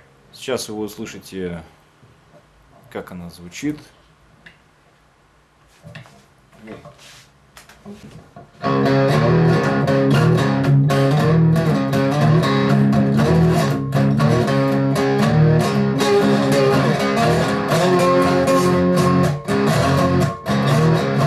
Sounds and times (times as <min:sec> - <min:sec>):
Speech: 0:00.3 - 0:01.8, 0:02.8 - 0:04.0
Blues: 0:08.4 - 0:21.2
Bass guitar: 0:08.5 - 0:21.2
Electric guitar: 0:08.5 - 0:21.2
Strum: 0:08.6 - 0:21.2.